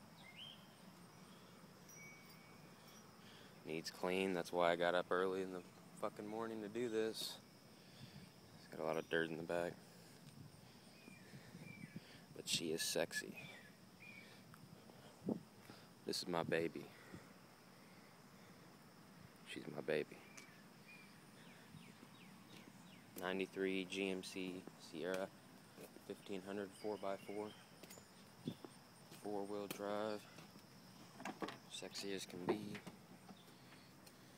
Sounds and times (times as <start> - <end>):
Speech: 3.7 - 7.4, 8.6 - 9.8, 12.4 - 13.5, 16.1 - 17.0, 19.5 - 20.3, 23.2 - 25.3, 26.0 - 27.6, 29.2 - 30.3, 31.7 - 32.9.